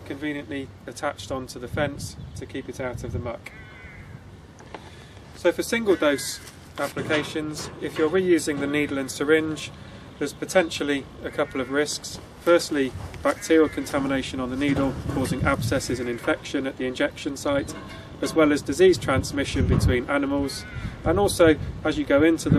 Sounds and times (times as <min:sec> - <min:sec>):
Speech: 0:00.0 - 0:03.5, 0:05.4 - 0:22.5.